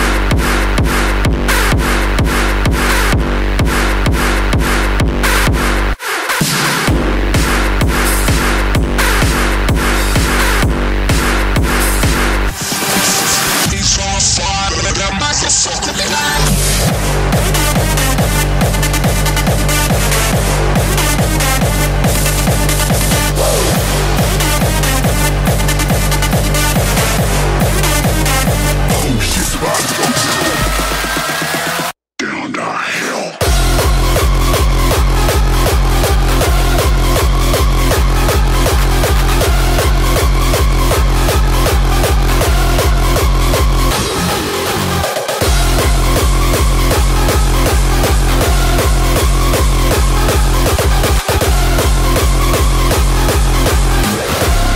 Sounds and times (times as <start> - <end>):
Electronic dance music: 0.0 - 54.7.